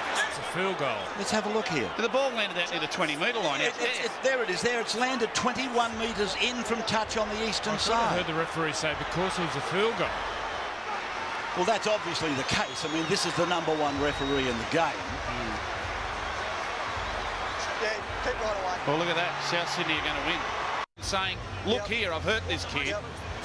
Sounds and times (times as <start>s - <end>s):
Speech: 0.2s - 10.1s, 11.6s - 15.6s, 21.0s - 23.1s.